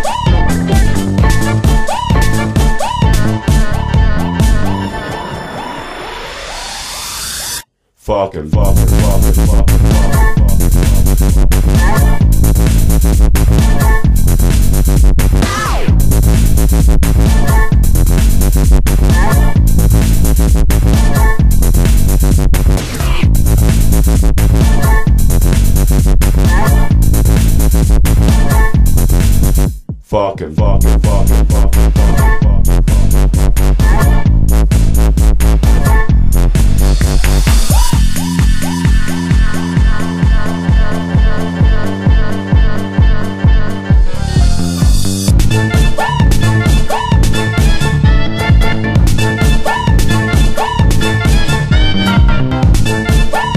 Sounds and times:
Dubstep: 8.6s - 29.8s, 30.7s - 41.5s, 44.4s - 53.5s.

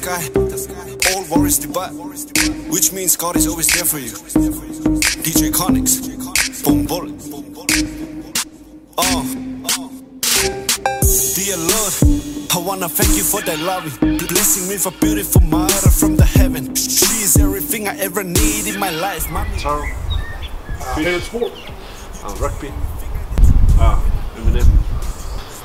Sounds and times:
Music: 0.0s - 19.4s
Speech: 20.8s - 21.6s, 22.2s - 24.8s.

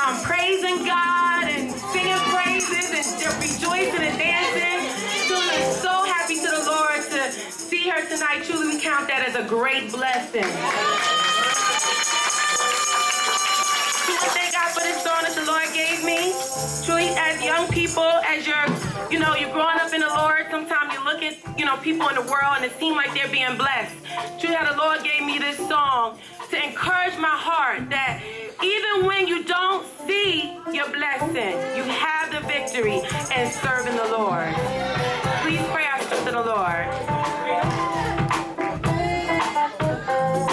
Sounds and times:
Speech: 0.0s - 11.4s, 14.1s - 37.6s
Music: 0.0s - 40.5s.

